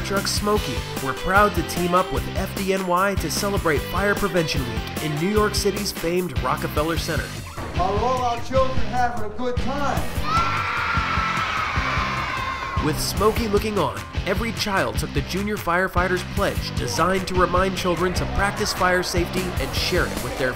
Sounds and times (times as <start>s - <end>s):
Speech: 0.0s - 10.1s, 12.8s - 20.5s
Music: 0.0s - 20.5s.